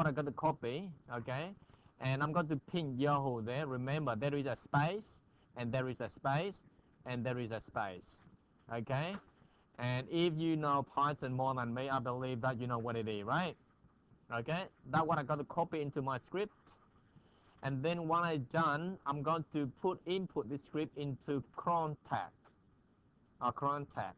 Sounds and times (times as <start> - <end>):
Speech: 0.0 - 13.6, 14.3 - 16.8, 17.6 - 22.4, 23.4 - 24.1.